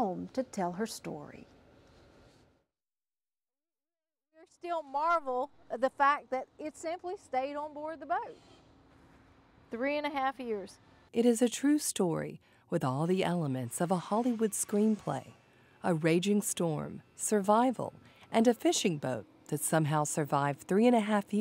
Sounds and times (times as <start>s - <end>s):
Speech: 0.0s - 1.5s, 4.4s - 8.4s, 9.8s - 21.4s.